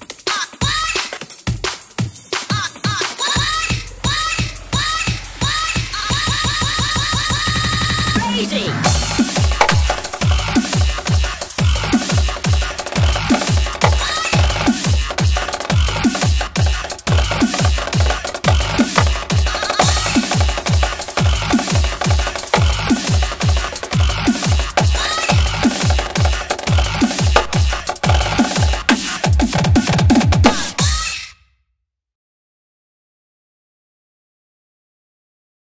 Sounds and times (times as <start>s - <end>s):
Drum kit: 8.0s - 31.0s
Bass drum: 8.9s - 30.8s
Drum roll: 8.9s - 30.8s.